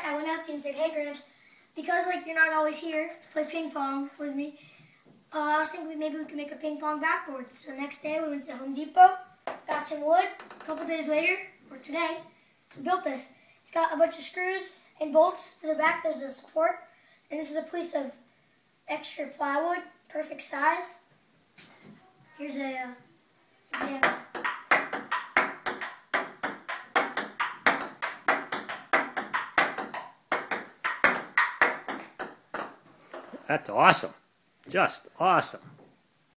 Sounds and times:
Speech: 0.0 - 4.6, 5.3 - 18.2, 22.2 - 24.1, 33.4 - 35.7.

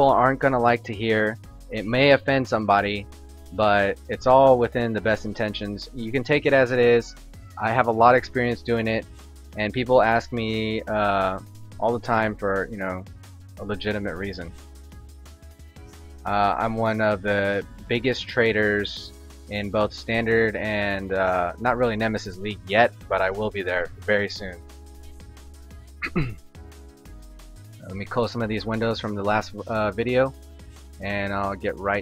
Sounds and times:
Speech: 0.0 - 3.0, 3.6 - 9.0, 9.6 - 13.0, 13.6 - 14.5, 16.3 - 24.6, 27.8 - 30.3, 31.0 - 32.0
Music: 0.0 - 32.0.

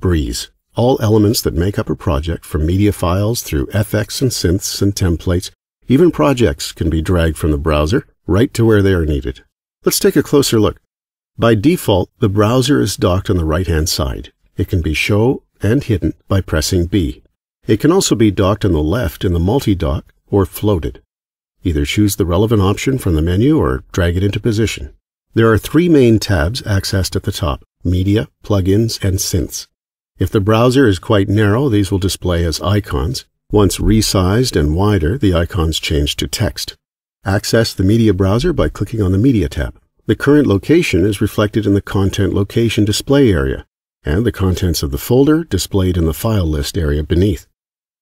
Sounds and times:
Speech: 0.0 - 47.6.

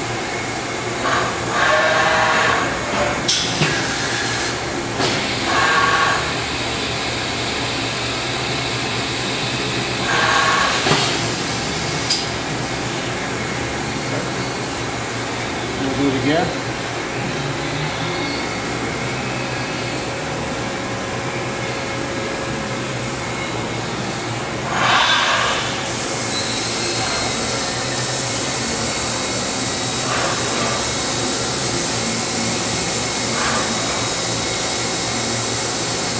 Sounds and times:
Hiss: 3.3 - 12.3, 24.7 - 36.1.

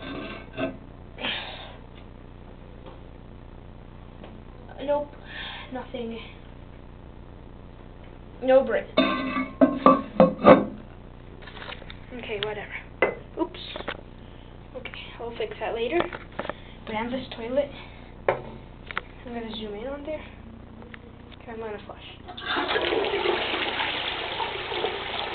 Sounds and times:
Speech: 12.1 - 12.8, 14.8 - 16.1, 16.9 - 17.8, 19.2 - 20.4, 21.4 - 22.2.

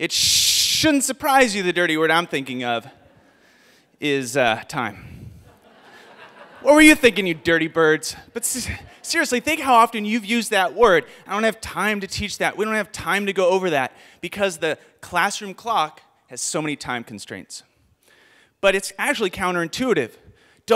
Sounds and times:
Speech: 0.0 - 3.0, 4.0 - 5.1, 6.6 - 17.7, 18.6 - 20.7.

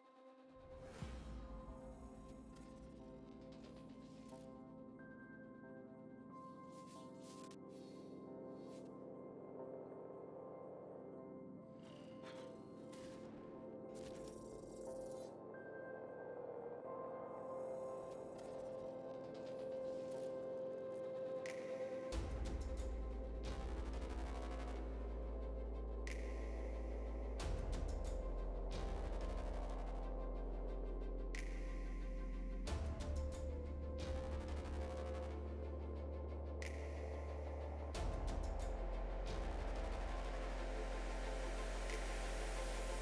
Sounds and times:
Music: 0.0 - 43.0.

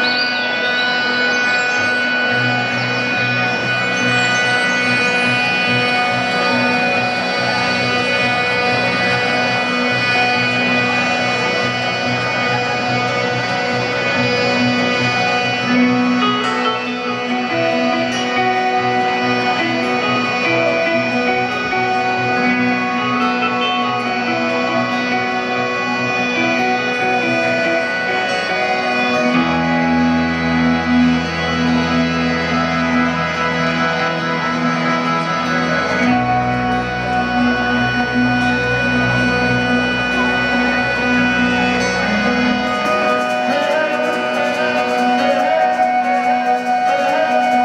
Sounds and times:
Music: 0.0 - 47.6.

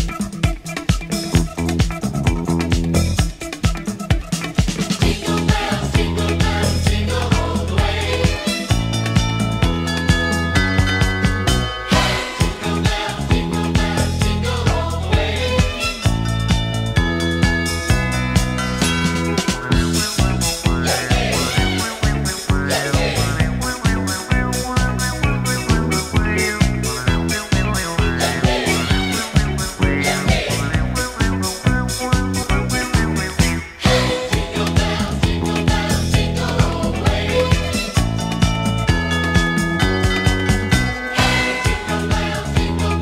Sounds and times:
Christian music: 4.8 - 43.0
Christmas music: 5.0 - 43.0.

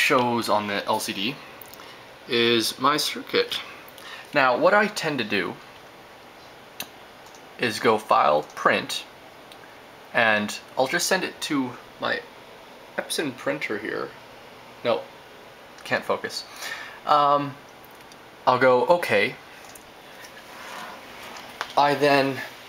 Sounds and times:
Speech: 0.0 - 1.4, 2.3 - 3.7, 4.3 - 5.6, 7.6 - 9.1, 10.1 - 12.3, 13.0 - 14.2, 14.8 - 15.1, 15.8 - 17.6, 18.4 - 19.4, 21.8 - 22.6.

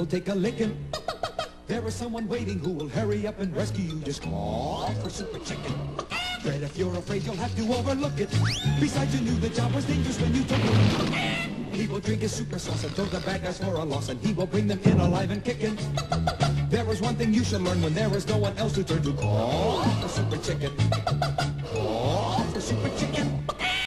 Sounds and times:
Music: 0.0 - 23.8.

